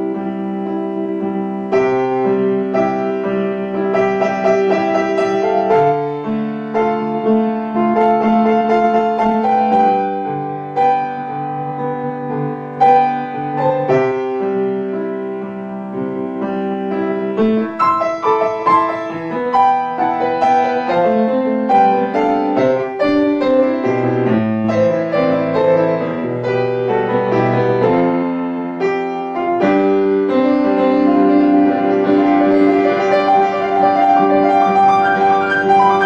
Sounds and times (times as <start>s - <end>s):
Music: 0.0s - 36.0s.